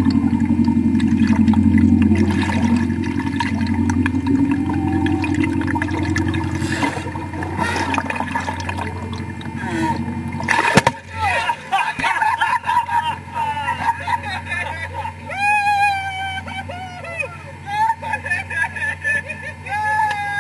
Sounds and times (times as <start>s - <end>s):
Sailboat, sailing ship: 0.0s - 20.4s
Speech: 19.6s - 20.4s.